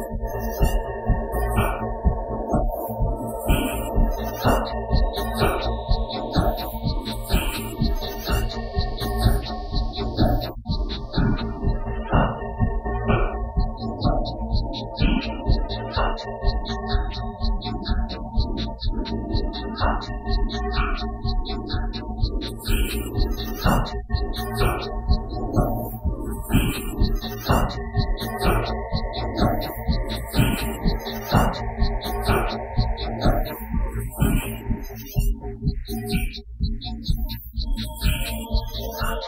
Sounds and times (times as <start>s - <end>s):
Synthesizer: 0.0s - 39.2s
Techno: 0.0s - 39.2s.